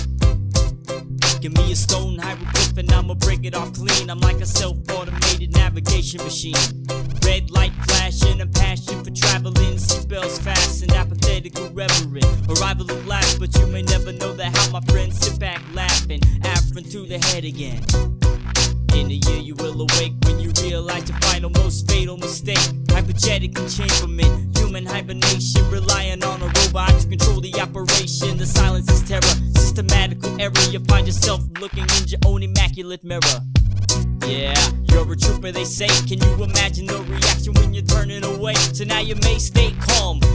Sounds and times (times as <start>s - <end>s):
Music: 0.0s - 40.3s.